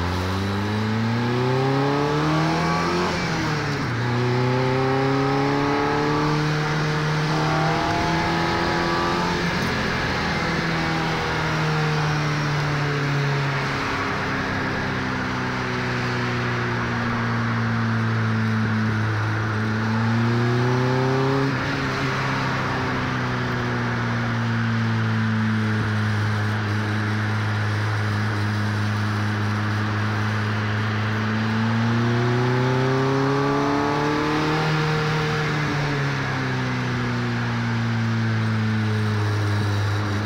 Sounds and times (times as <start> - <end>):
Accelerating, revving, vroom: 0.0 - 40.2
Car: 0.0 - 40.2.